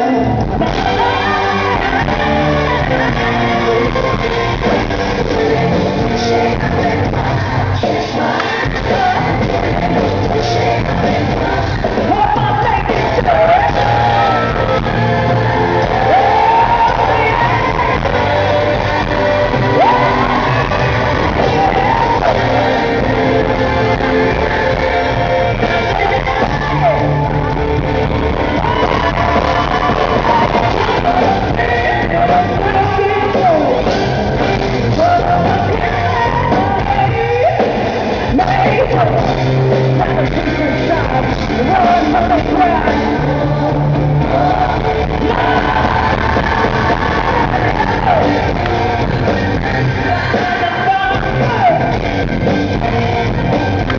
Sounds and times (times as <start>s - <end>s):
Music: 0.0s - 53.9s
Singing: 0.0s - 53.9s
Whoop: 13.3s - 22.8s, 26.1s - 31.5s.